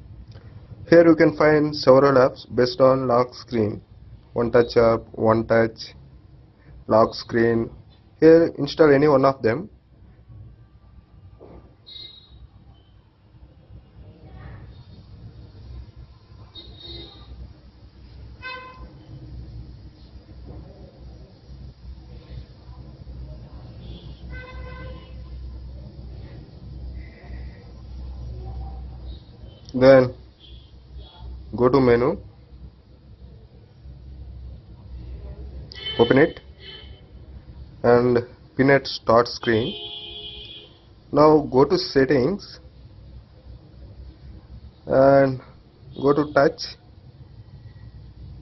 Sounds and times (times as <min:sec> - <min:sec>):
Speech: 0:00.9 - 0:03.8, 0:04.4 - 0:06.0, 0:06.9 - 0:09.7, 0:29.7 - 0:30.2, 0:31.0 - 0:32.3, 0:35.2 - 0:36.4, 0:37.8 - 0:39.8, 0:41.1 - 0:42.6, 0:44.9 - 0:46.8.